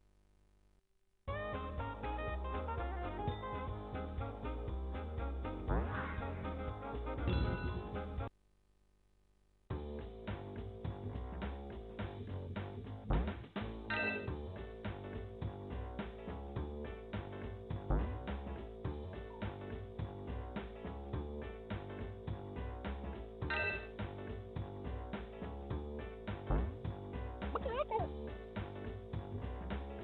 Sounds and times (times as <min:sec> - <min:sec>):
Background music: 0:01.3 - 0:08.3, 0:09.7 - 0:30.0
Funny music: 0:01.3 - 0:08.3, 0:09.7 - 0:30.0
Video game music: 0:01.3 - 0:08.3, 0:09.8 - 0:30.0.